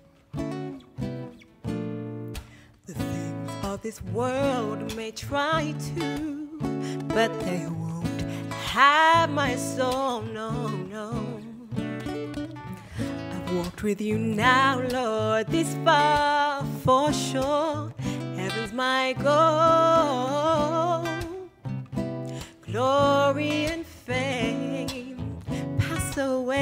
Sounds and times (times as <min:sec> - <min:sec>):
Music: 0:00.0 - 0:26.6.